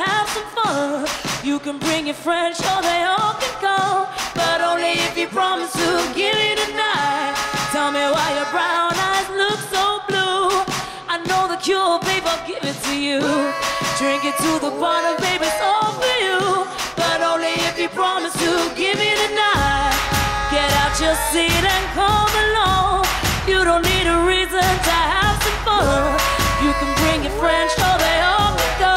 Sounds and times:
Music of Asia: 12.1 - 28.9.

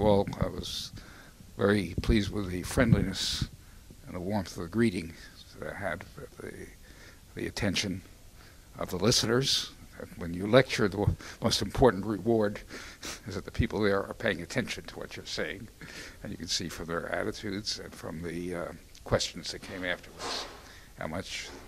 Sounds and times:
Speech: 0.0 - 1.0, 1.6 - 6.8, 7.4 - 8.1, 8.8 - 21.6.

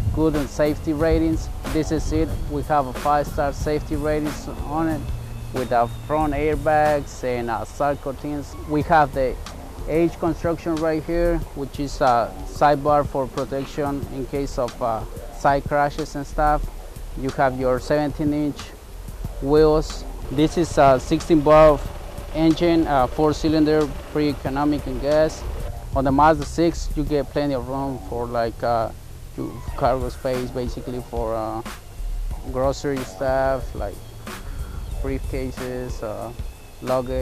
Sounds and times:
Speech: 0.0 - 5.0, 5.6 - 16.6, 17.2 - 18.8, 19.4 - 21.8, 22.4 - 25.4, 26.0 - 31.7, 32.4 - 34.0, 35.0 - 37.2
Music: 0.0 - 37.2.

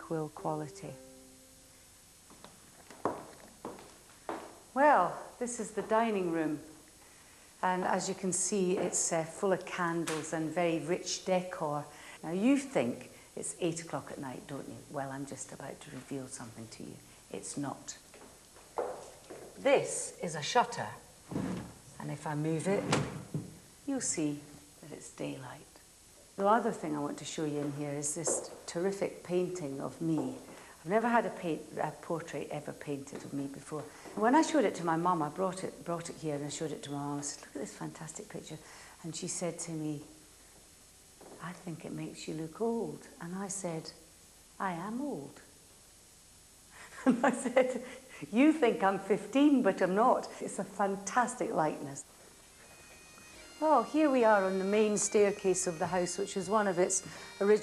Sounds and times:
Female speech, woman speaking: 0.0 - 1.0, 4.8 - 6.8, 7.6 - 18.1, 19.6 - 21.1, 22.0 - 23.1, 23.9 - 25.7, 26.4 - 40.1, 41.4 - 44.0, 44.6 - 45.5, 47.0 - 52.1, 53.6 - 57.6.

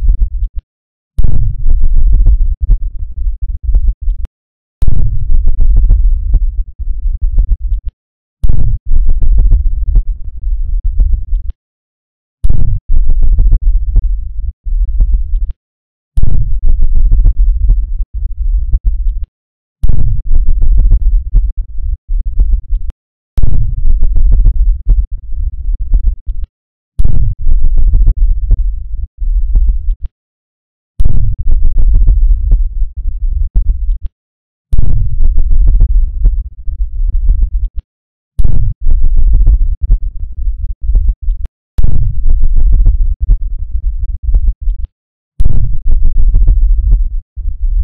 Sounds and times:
Rumble: 0.0 - 0.6, 1.2 - 11.6, 12.4 - 15.6, 16.2 - 30.1, 31.0 - 34.1, 34.7 - 37.8, 38.4 - 47.8.

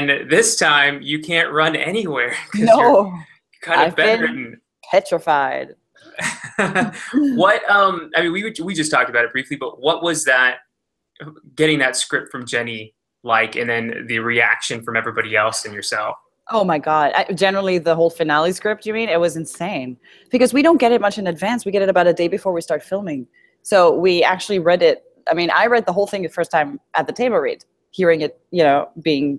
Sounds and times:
Speech: 0.0 - 10.6, 11.2 - 29.3.

